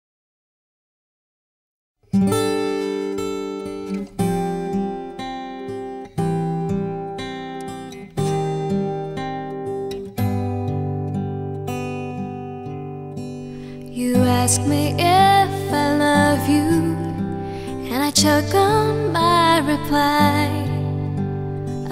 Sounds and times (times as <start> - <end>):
Acoustic guitar: 2.0 - 21.9.